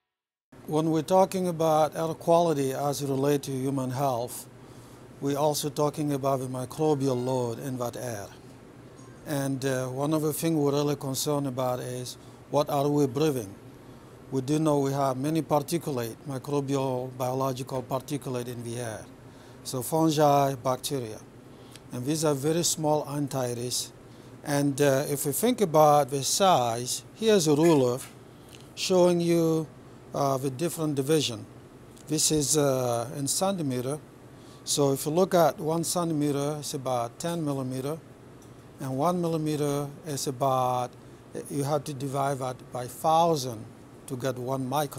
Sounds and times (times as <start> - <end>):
Speech: 0.7 - 4.5, 5.2 - 8.4, 9.2 - 13.6, 14.3 - 19.1, 19.7 - 21.3, 21.9 - 23.9, 24.5 - 28.1, 28.8 - 31.5, 32.1 - 34.0, 34.7 - 38.0, 38.8 - 44.9.